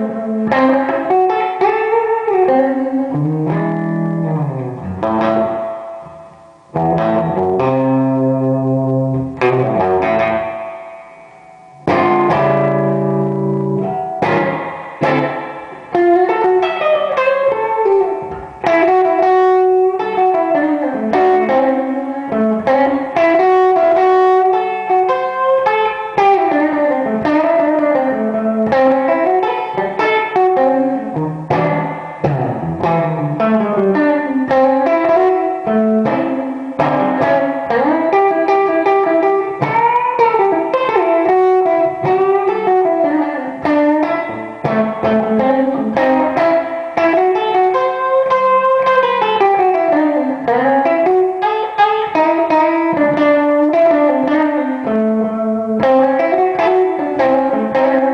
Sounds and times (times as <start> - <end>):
Music: 0.0 - 58.1.